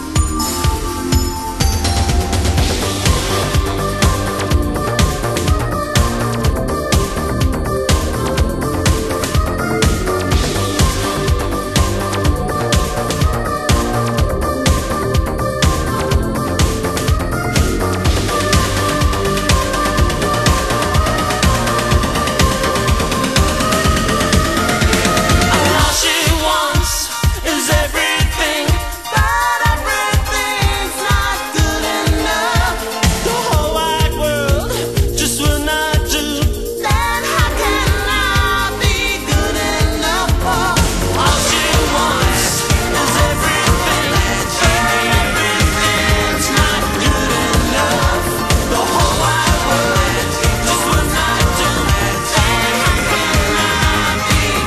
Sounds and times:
Exciting music: 0:00.0 - 0:54.6
Pop music: 0:00.0 - 0:54.6
Singing: 0:02.8 - 0:54.6.

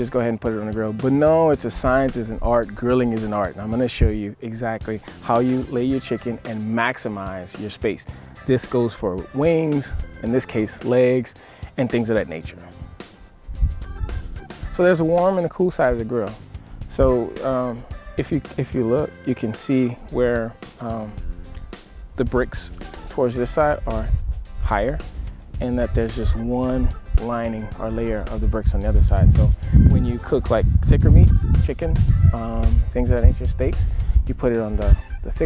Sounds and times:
Speech: 0:00.0 - 0:12.8, 0:14.8 - 0:21.2, 0:22.2 - 0:25.0, 0:25.6 - 0:35.4
Music: 0:00.0 - 0:35.4.

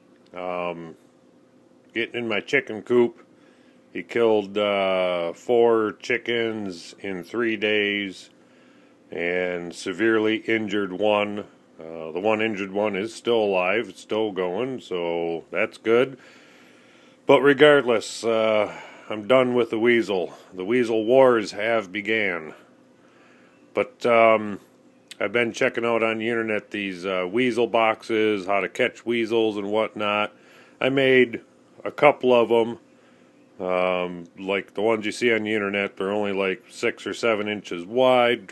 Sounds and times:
Speech: 0:00.3 - 0:01.0, 0:01.9 - 0:03.2, 0:04.0 - 0:08.3, 0:09.1 - 0:16.2, 0:17.3 - 0:22.7, 0:23.8 - 0:32.8, 0:33.6 - 0:38.5.

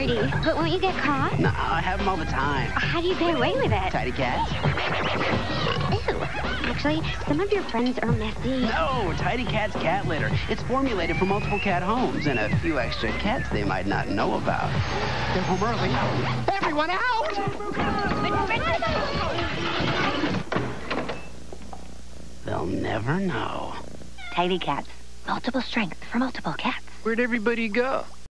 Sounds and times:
Meow: 0:24.2 - 0:24.4.

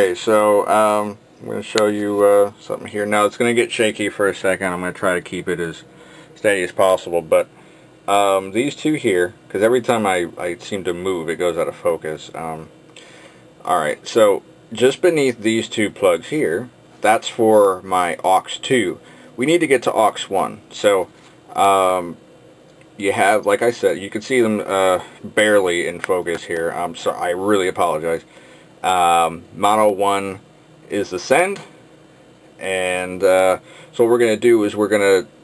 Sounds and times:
Speech: 0:00.0 - 0:07.5, 0:08.1 - 0:12.7, 0:13.6 - 0:22.2, 0:23.0 - 0:31.8, 0:32.6 - 0:35.4.

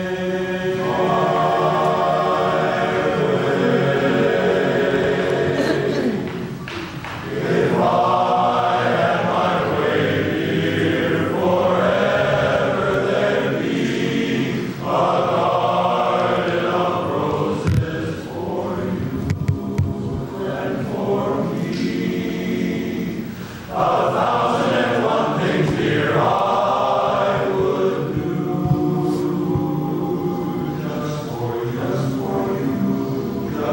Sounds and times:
Music: 0:00.0 - 0:33.7.

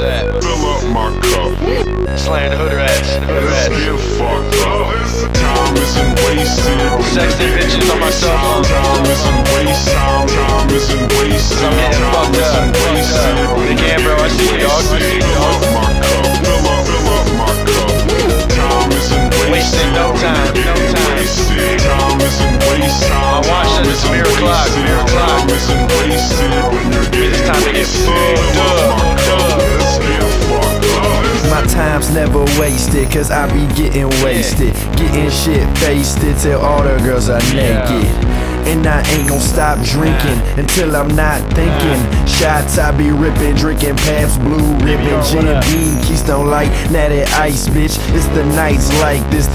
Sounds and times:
Music: 0:00.0 - 0:49.5.

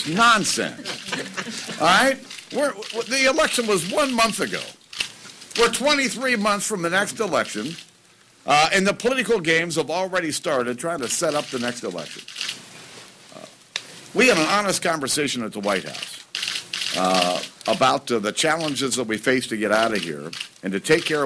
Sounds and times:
Speech: 0:01.8 - 0:04.8, 0:05.6 - 0:07.8, 0:08.5 - 0:12.2, 0:14.2 - 0:16.2, 0:17.0 - 0:21.2.

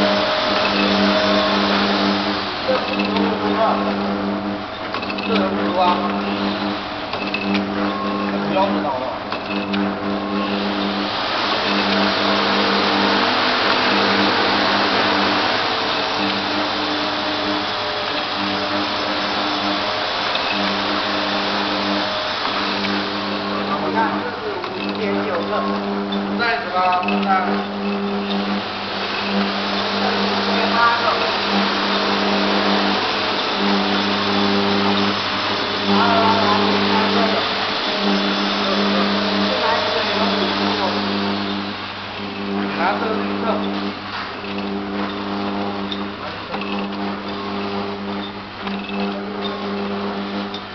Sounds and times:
Speech: 0:02.7 - 0:04.0, 0:05.3 - 0:06.3, 0:08.5 - 0:09.2, 0:23.6 - 0:25.8, 0:26.4 - 0:27.7, 0:30.0 - 0:31.4, 0:35.9 - 0:37.4, 0:38.6 - 0:41.2, 0:42.6 - 0:43.8.

